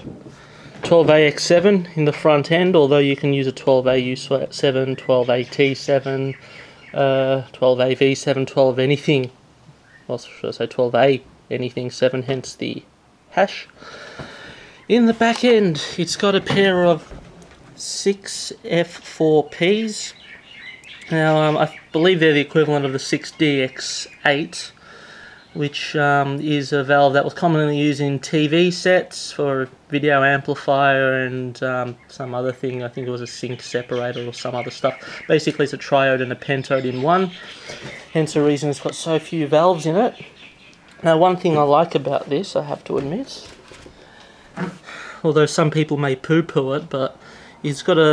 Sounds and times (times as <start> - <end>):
Speech: 0.8 - 6.4, 7.0 - 9.4, 10.1 - 13.7, 14.9 - 17.2, 17.8 - 20.2, 21.0 - 24.8, 25.6 - 37.5, 38.1 - 40.2, 41.0 - 43.6, 44.6 - 48.1.